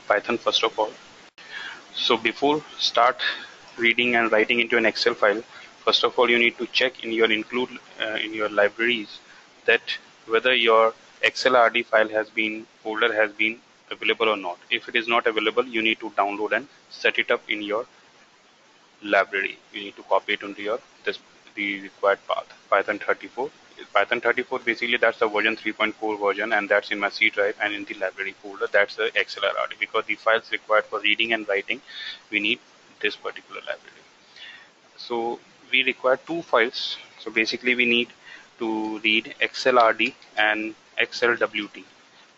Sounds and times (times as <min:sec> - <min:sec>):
Speech: 0:00.0 - 0:01.0, 0:01.8 - 0:17.9, 0:19.0 - 0:34.0, 0:35.0 - 0:41.8.